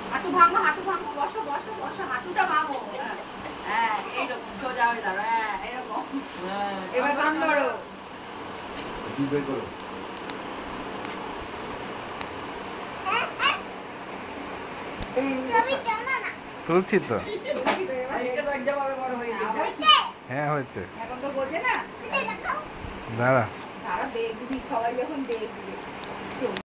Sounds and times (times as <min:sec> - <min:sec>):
Child speech, kid speaking: 0:13.0 - 0:13.7, 0:15.2 - 0:16.4, 0:19.4 - 0:20.2, 0:22.0 - 0:22.7.